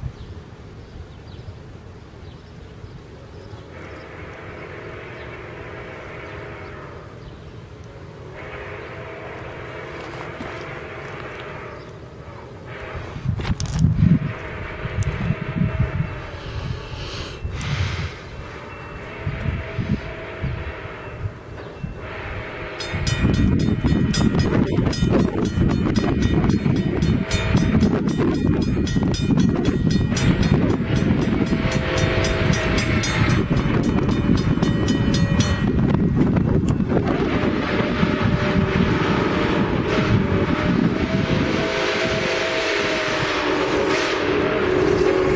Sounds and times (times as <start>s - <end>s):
Vehicle: 0.0s - 22.4s.